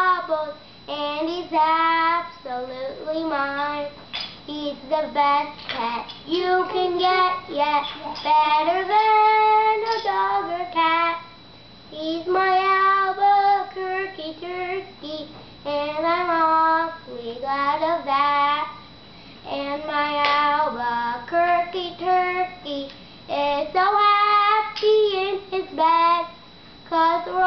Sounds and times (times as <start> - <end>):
Child singing: 0.0 - 18.8, 19.5 - 27.4.